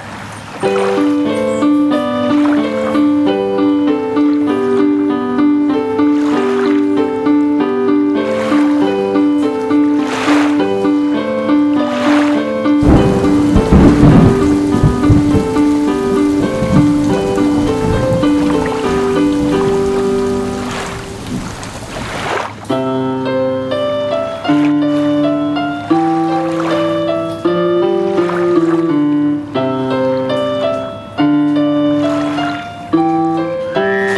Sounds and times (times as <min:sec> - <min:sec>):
Stream: 0:00.0 - 0:07.3, 0:08.1 - 0:22.8, 0:24.5 - 0:30.3, 0:31.9 - 0:34.1.